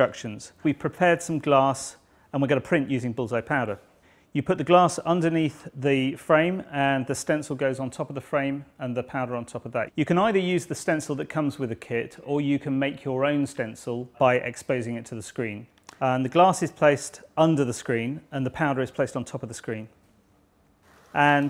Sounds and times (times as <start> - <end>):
Speech: 0.0 - 20.0, 21.2 - 21.5.